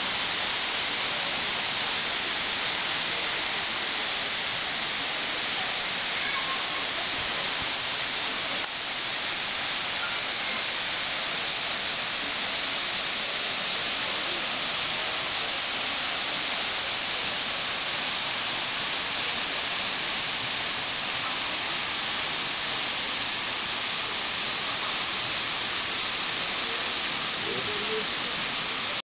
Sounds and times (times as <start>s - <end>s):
Speech: 5.4s - 7.7s, 10.0s - 10.8s, 26.6s - 29.0s.